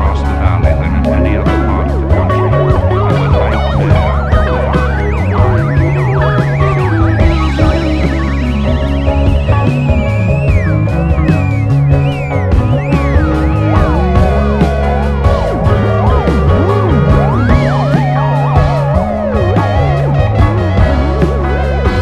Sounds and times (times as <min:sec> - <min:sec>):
Psychedelic rock: 0:00.0 - 0:22.0.